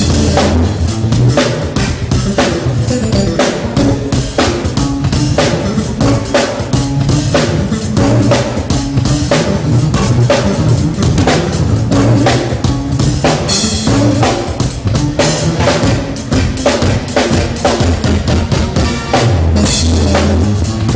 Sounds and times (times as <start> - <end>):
Music: 0.0 - 20.9.